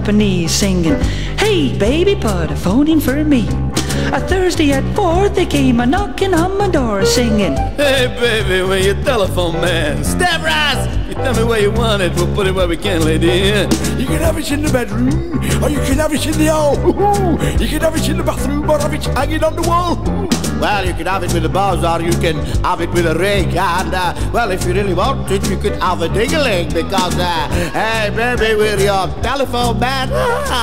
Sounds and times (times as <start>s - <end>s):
Speech: 0.0s - 20.0s, 20.6s - 30.6s
Music: 0.0s - 30.6s.